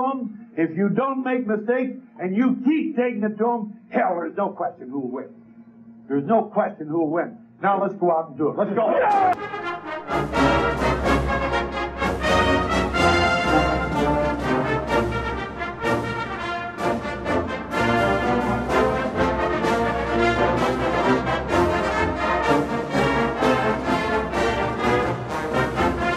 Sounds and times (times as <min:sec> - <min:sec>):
Speech: 0:00.0 - 0:05.3, 0:06.1 - 0:09.4
Music: 0:00.0 - 0:26.1.